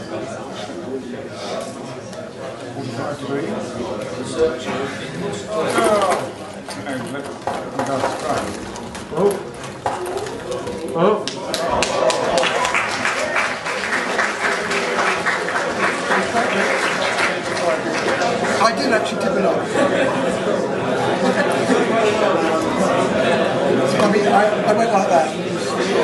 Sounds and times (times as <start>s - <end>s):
Speech: 0.0s - 9.6s, 14.0s - 26.0s.